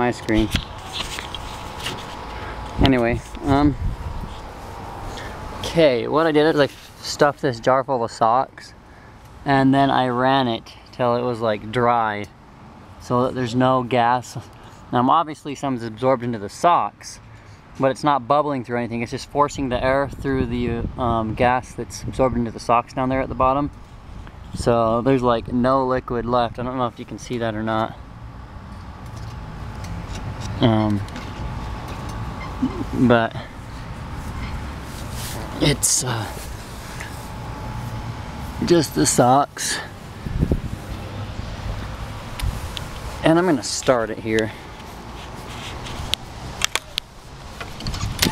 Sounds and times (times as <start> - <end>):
Speech: 0.0 - 0.6, 2.8 - 3.8, 5.6 - 8.8, 9.4 - 12.3, 13.0 - 17.2, 17.8 - 23.7, 24.6 - 28.0, 30.6 - 31.1, 32.6 - 33.5, 35.6 - 36.5, 38.6 - 39.9, 43.2 - 44.6.